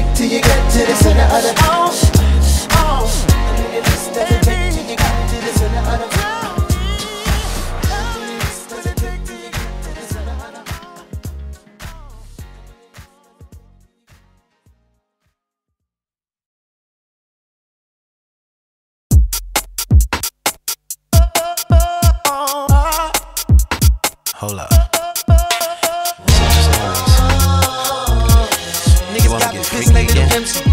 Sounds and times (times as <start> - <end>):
Drum machine: 0.0 - 12.0, 19.1 - 30.7.